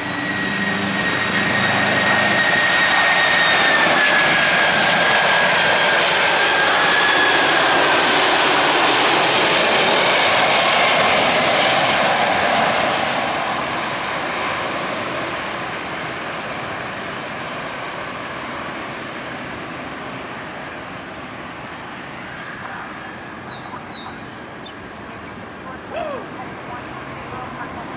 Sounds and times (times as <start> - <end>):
Aircraft: 0.0 - 27.9
Outside, urban or manmade: 0.0 - 27.9.